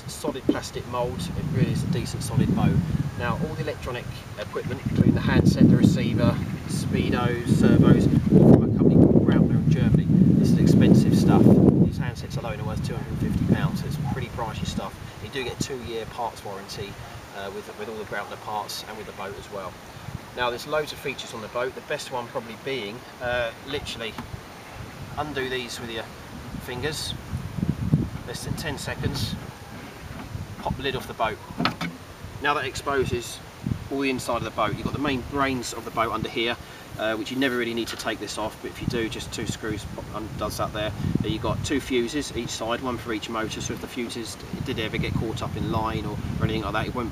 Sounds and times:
Speech: 0:00.0 - 0:19.8, 0:20.4 - 0:24.2, 0:25.2 - 0:27.2, 0:28.3 - 0:29.4, 0:30.6 - 0:31.5, 0:32.4 - 0:47.1.

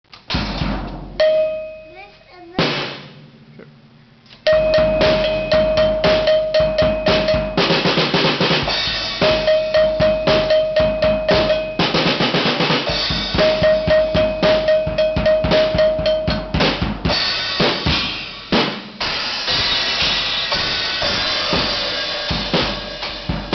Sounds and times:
Drum kit: 0:00.1 - 0:23.5
Rimshot: 0:00.3 - 0:01.2, 0:02.6 - 0:03.6, 0:16.6 - 0:23.5
Cowbell: 0:01.2 - 0:01.9, 0:04.5 - 0:07.9, 0:09.0 - 0:12.0, 0:12.9 - 0:16.6
Bass drum: 0:04.5 - 0:23.5.

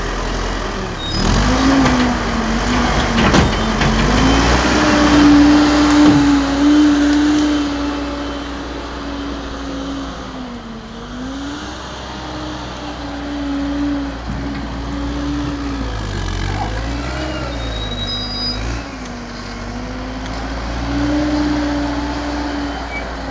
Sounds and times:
Truck: 0:00.0 - 0:23.3.

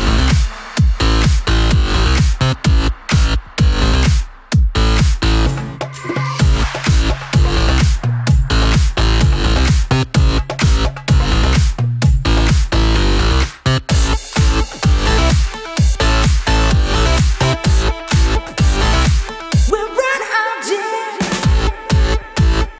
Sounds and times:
Music: 0:00.0 - 0:22.7.

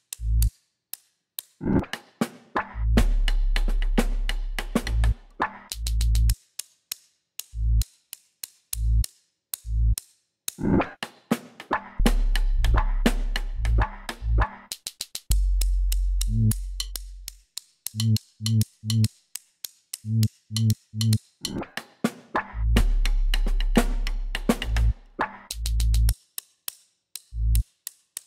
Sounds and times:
Snare drum: 0:01.9 - 0:06.1, 0:21.8 - 0:25.6.

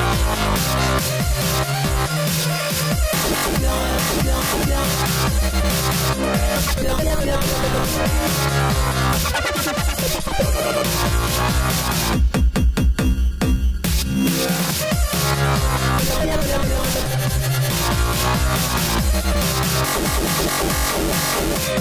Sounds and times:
Techno: 0:00.0 - 0:21.8.

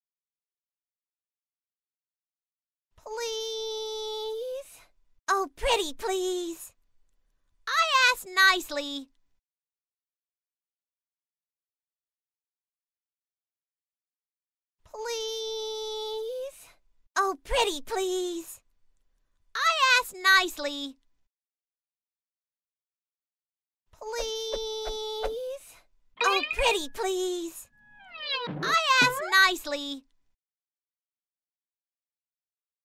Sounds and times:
Speech: 0:03.0 - 0:06.8, 0:07.7 - 0:09.1, 0:14.9 - 0:18.6, 0:19.6 - 0:21.0, 0:24.0 - 0:27.7, 0:28.4 - 0:30.1.

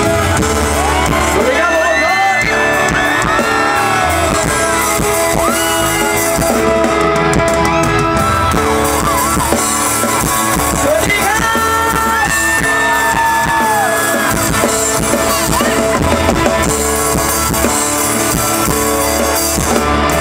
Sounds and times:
Music: 0:00.0 - 0:20.2.

